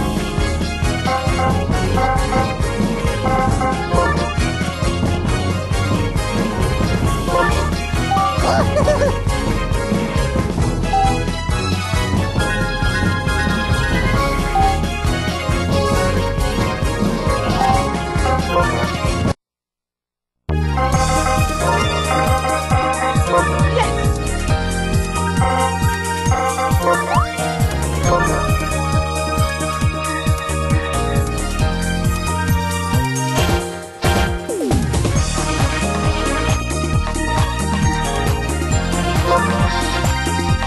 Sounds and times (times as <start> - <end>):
Music: 0.0 - 19.4, 20.5 - 40.6.